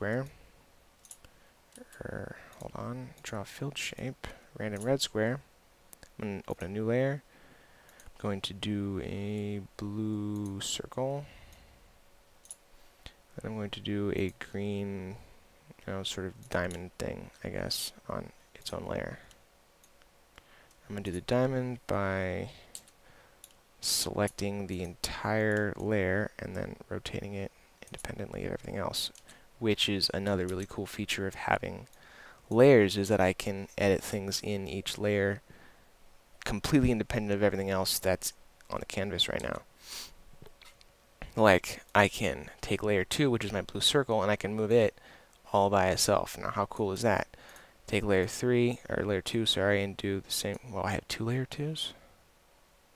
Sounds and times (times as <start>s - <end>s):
Speech: 0.0s - 0.4s, 1.8s - 5.5s, 6.2s - 7.3s, 8.2s - 11.4s, 13.4s - 19.3s, 20.9s - 22.7s, 23.8s - 31.9s, 32.5s - 35.4s, 36.4s - 39.7s, 41.2s - 52.0s.